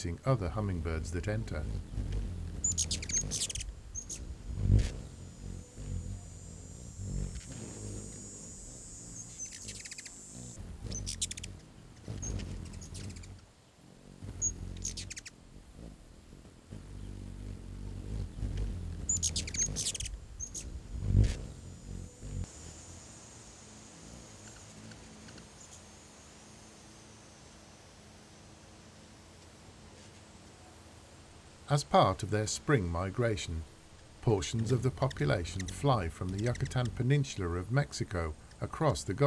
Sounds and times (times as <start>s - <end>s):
Bird: 1.7s - 6.4s, 7.2s - 13.4s, 14.3s - 15.4s, 18.1s - 21.4s, 34.3s - 37.1s.